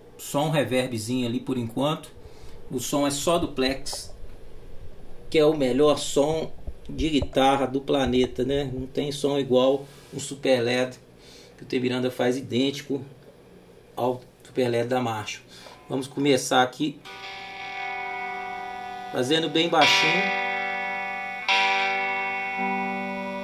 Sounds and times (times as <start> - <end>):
Speech: 0.2 - 4.1, 5.3 - 11.0, 11.6 - 13.1, 14.0 - 17.0, 19.2 - 20.3.